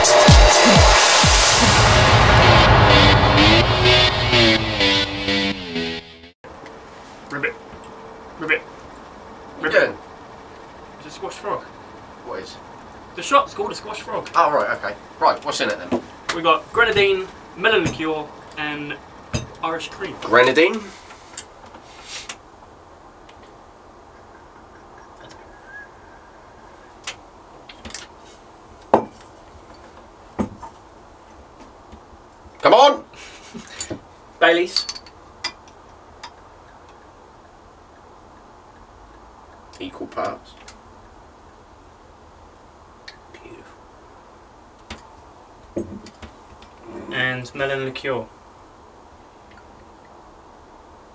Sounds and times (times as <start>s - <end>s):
Speech: 7.3s - 7.6s, 8.4s - 8.7s, 9.6s - 10.0s, 11.0s - 12.6s, 13.2s - 19.0s, 19.6s - 21.0s, 32.6s - 33.1s, 34.4s - 34.8s, 39.8s - 40.7s, 43.3s - 43.8s, 46.8s - 48.3s.